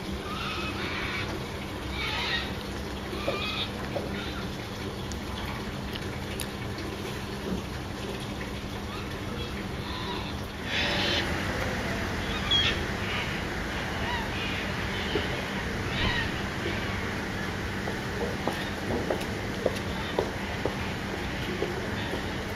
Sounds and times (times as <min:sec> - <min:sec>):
Animal: 0:00.2 - 0:04.5, 0:08.9 - 0:17.1, 0:18.2 - 0:22.5.